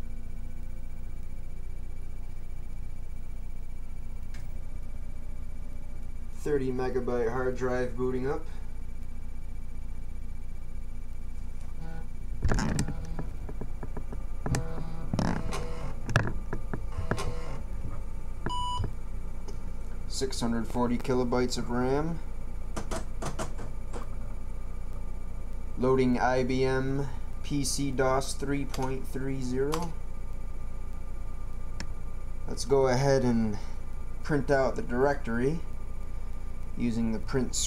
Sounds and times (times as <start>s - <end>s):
Speech: 6.4s - 8.6s, 20.1s - 22.2s, 25.8s - 30.0s, 32.5s - 35.7s, 36.8s - 37.6s.